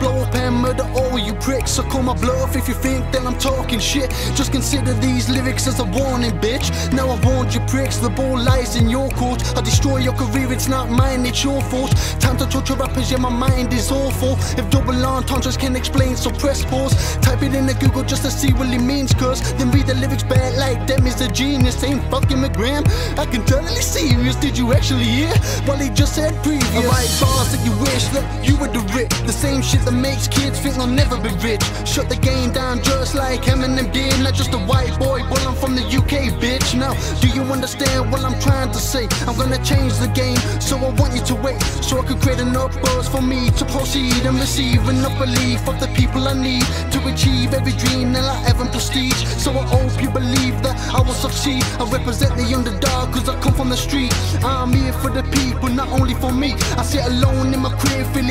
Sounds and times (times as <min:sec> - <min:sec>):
Music: 0:00.0 - 0:58.3.